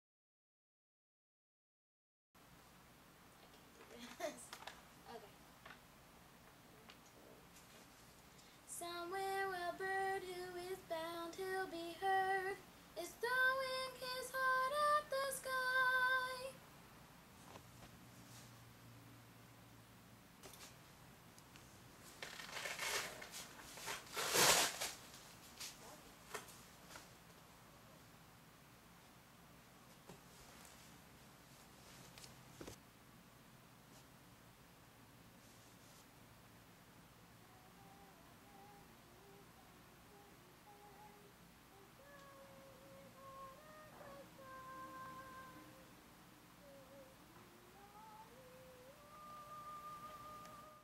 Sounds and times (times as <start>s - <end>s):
Child singing: 8.7s - 16.6s, 37.4s - 45.9s, 46.6s - 50.8s
Female singing: 8.7s - 16.6s, 37.4s - 45.9s, 46.6s - 50.8s.